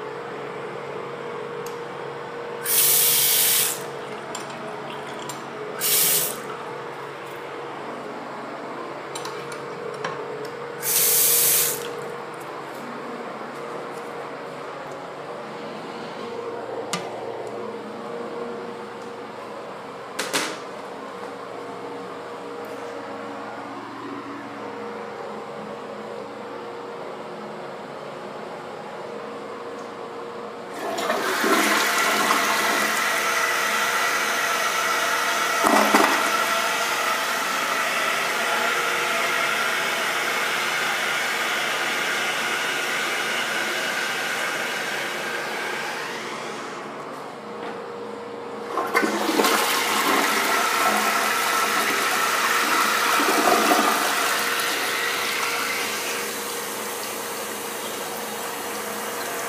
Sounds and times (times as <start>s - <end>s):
Toilet flush: 2.6s - 6.5s, 10.8s - 12.0s, 30.7s - 46.8s, 48.7s - 59.4s.